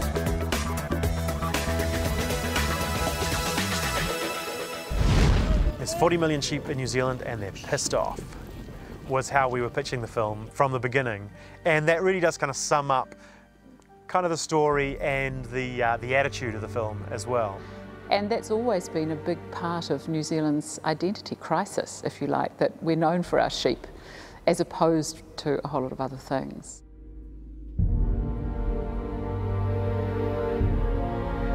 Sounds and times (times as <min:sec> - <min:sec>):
Music: 0:00.0 - 0:06.6, 0:08.4 - 0:31.5
Speech: 0:05.7 - 0:08.2, 0:09.1 - 0:13.1, 0:14.1 - 0:23.8, 0:24.5 - 0:26.8.